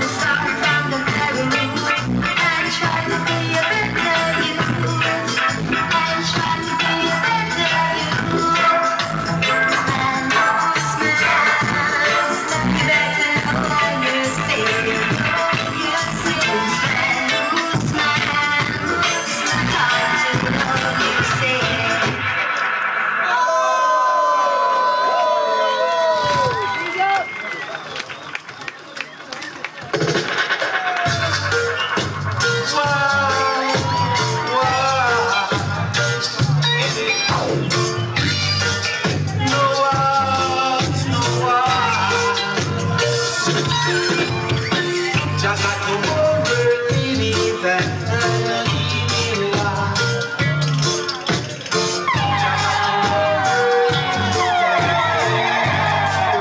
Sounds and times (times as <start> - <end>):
Music: 0.0 - 27.5, 29.8 - 56.4.